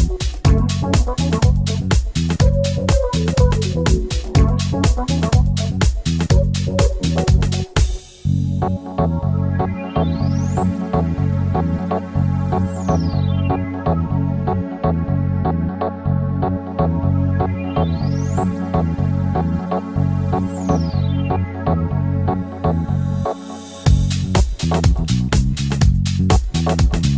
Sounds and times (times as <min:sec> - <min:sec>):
Music: 0:00.0 - 0:27.1.